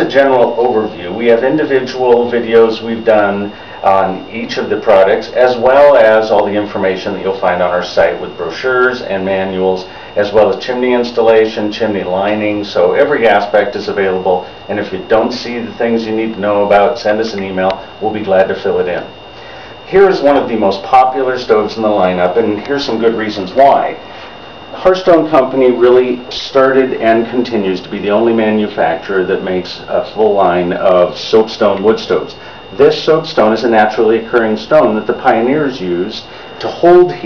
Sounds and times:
Speech: 0.0s - 19.2s, 19.9s - 24.0s, 24.7s - 37.2s.

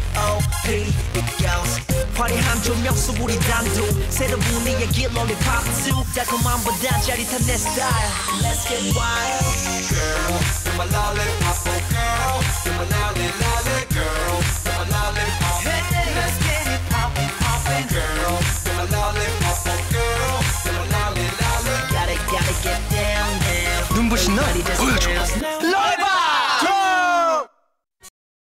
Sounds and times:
Music: 0.0s - 25.7s.

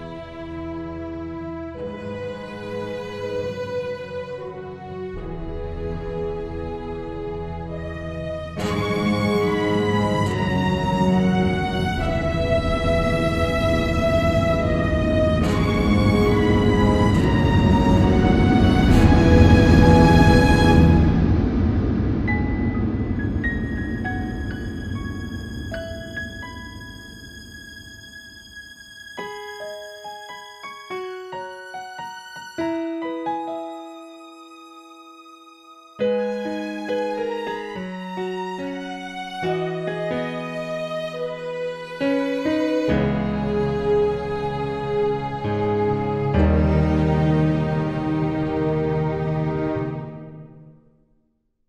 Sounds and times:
Music: 0.0s - 51.6s.

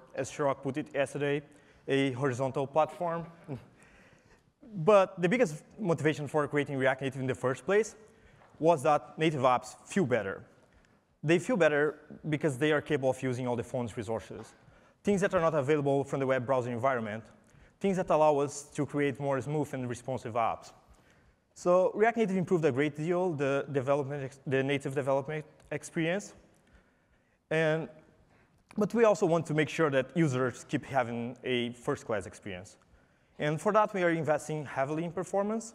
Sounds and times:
Speech: 0.0s - 3.7s, 4.6s - 10.5s, 11.2s - 20.8s, 21.6s - 26.5s, 27.5s - 28.0s, 28.7s - 35.7s.

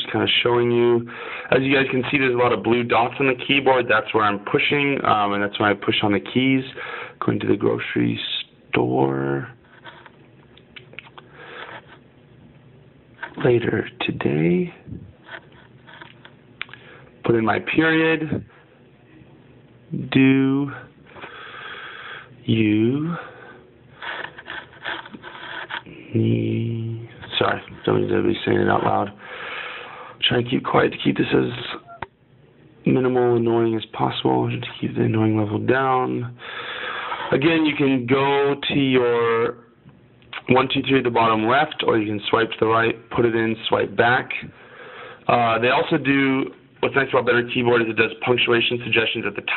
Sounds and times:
Speech: 0.0s - 9.6s, 13.3s - 15.1s, 17.2s - 18.5s, 19.9s - 20.9s, 22.4s - 23.3s, 25.9s - 29.2s, 30.2s - 31.9s, 32.8s - 36.4s, 37.3s - 39.7s, 40.3s - 44.6s, 45.3s - 49.5s.

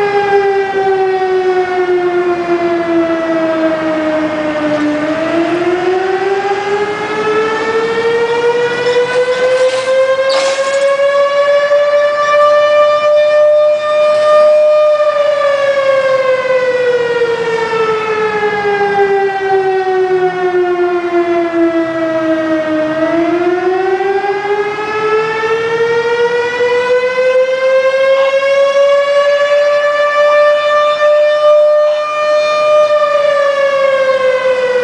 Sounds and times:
Siren: 0.0s - 34.8s.

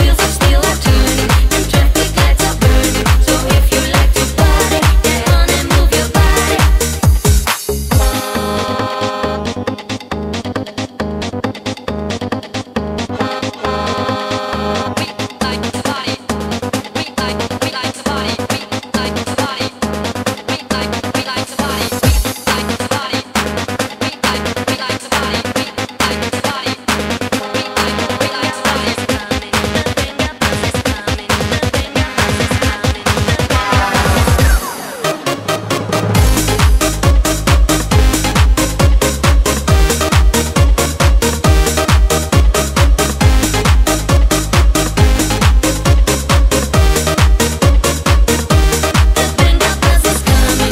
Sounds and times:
Dance music: 0.0s - 50.7s.

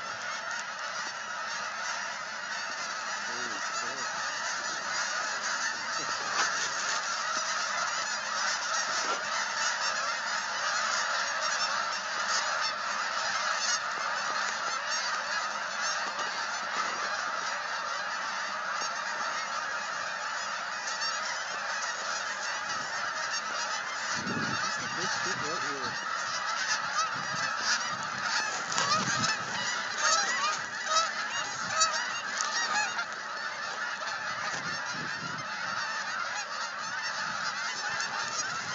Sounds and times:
Honk: 0.0s - 38.7s.

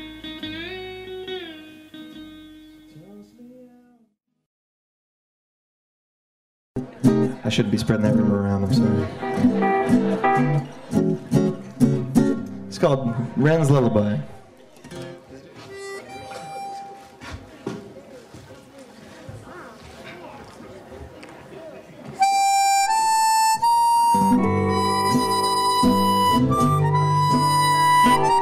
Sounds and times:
Music: 0.0s - 4.0s, 6.8s - 13.2s, 14.9s - 17.1s, 22.2s - 28.4s
Speech: 2.9s - 4.1s, 6.8s - 9.3s, 12.7s - 14.5s, 15.1s - 22.2s.

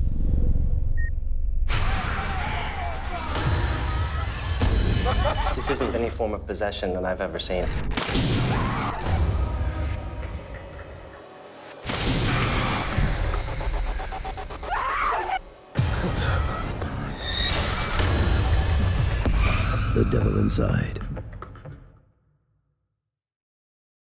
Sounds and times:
Music: 1.6s - 22.5s
Speech: 5.6s - 7.7s, 20.0s - 21.1s.

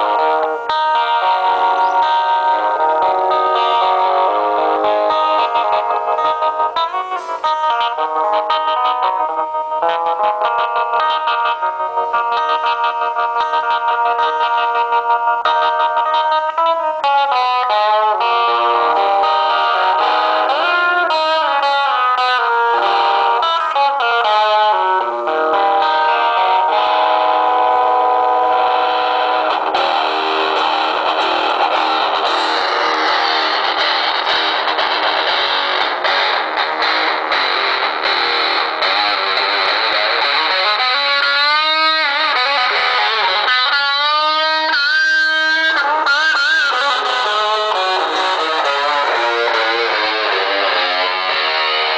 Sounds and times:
Music: 0.0s - 51.9s.

